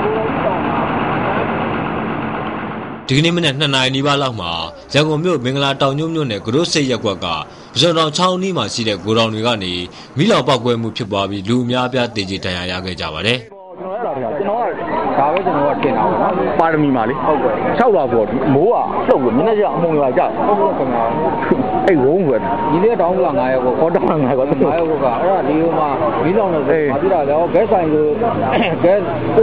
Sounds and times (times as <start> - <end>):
Speech: 0.0 - 1.4, 3.1 - 29.4.